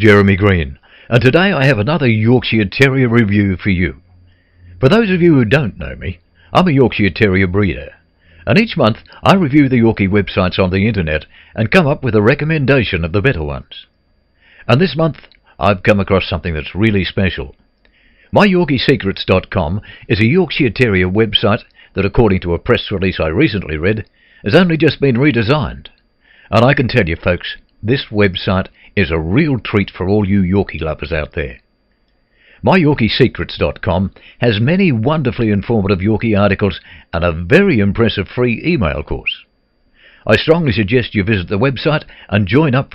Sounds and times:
Speech: 0.0s - 4.0s, 4.8s - 13.9s, 14.7s - 17.6s, 18.3s - 31.6s, 32.6s - 39.5s, 40.2s - 42.9s.

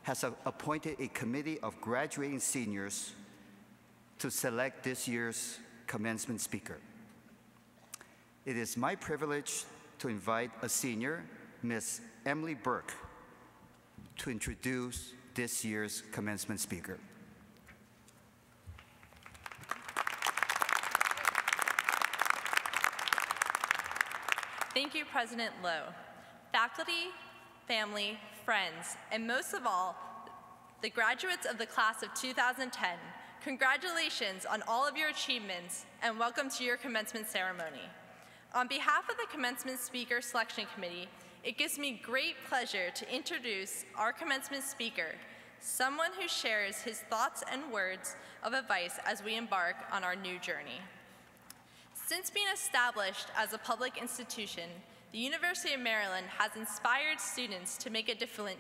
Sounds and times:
Narration, monologue: 0.0s - 19.0s, 24.0s - 58.6s
Female speech, woman speaking: 24.8s - 26.0s, 26.6s - 30.0s, 30.8s - 37.9s, 38.6s - 50.9s, 52.0s - 58.6s.

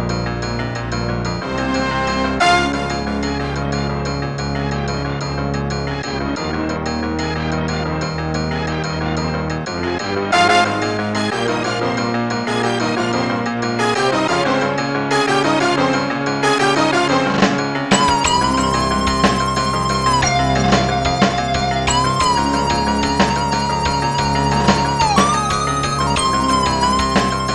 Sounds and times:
Music: 0.0s - 27.5s.

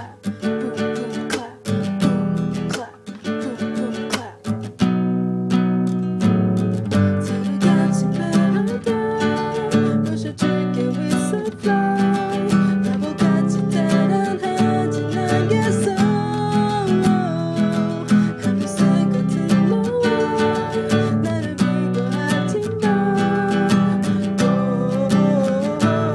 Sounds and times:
Acoustic guitar: 0.0s - 26.1s
Electric guitar: 1.3s - 26.1s.

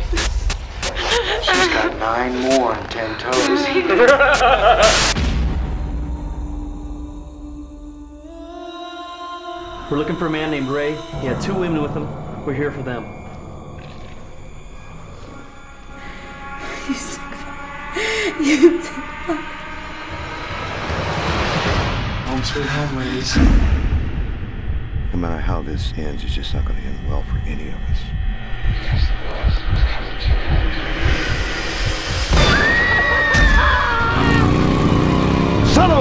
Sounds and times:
Speech: 1.4s - 3.9s, 22.3s - 23.6s, 25.1s - 30.4s, 35.6s - 36.0s.

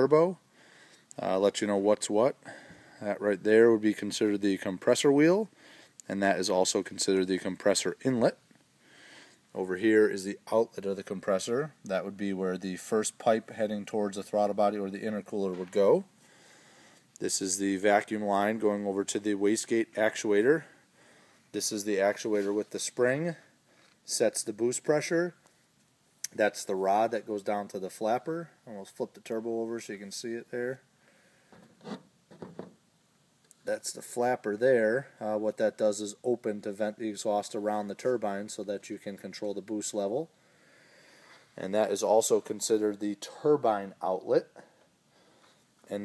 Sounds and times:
Speech: 0.0s - 0.4s, 1.2s - 2.4s, 3.0s - 8.4s, 9.5s - 16.1s, 17.2s - 20.8s, 21.5s - 23.5s, 24.1s - 25.4s, 26.3s - 30.9s, 33.6s - 40.3s, 41.6s - 44.7s.

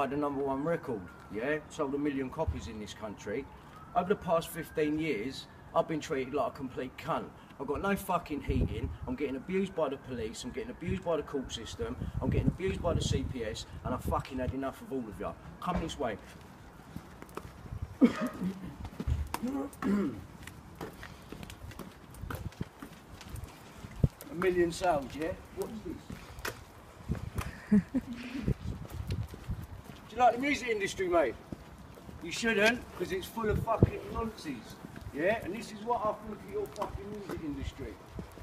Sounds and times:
Speech: 0.0s - 16.2s, 24.3s - 26.1s, 30.1s - 31.4s, 32.2s - 38.0s.

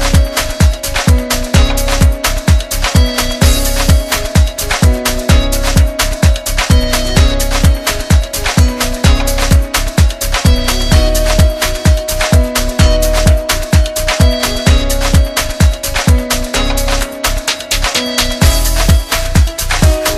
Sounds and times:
Music: 0.0s - 20.1s.

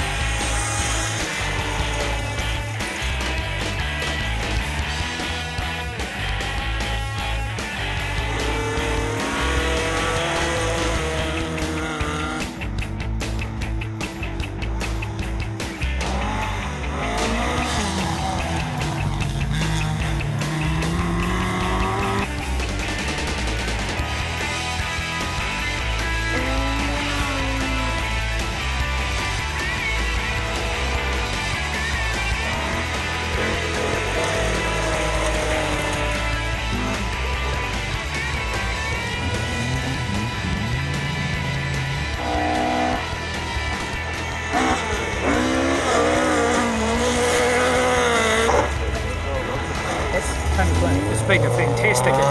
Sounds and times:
Music: 0.0s - 52.3s
Race car, auto racing: 0.0s - 52.3s
Skidding: 0.0s - 52.3s.

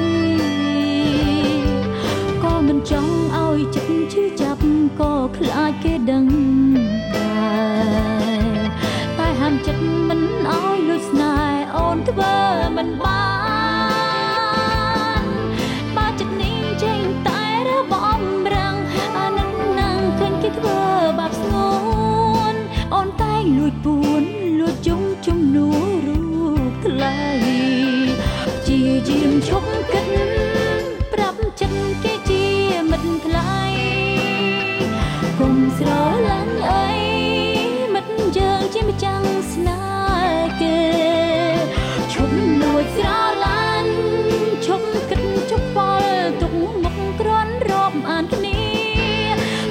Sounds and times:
Music: 0.0s - 49.7s.

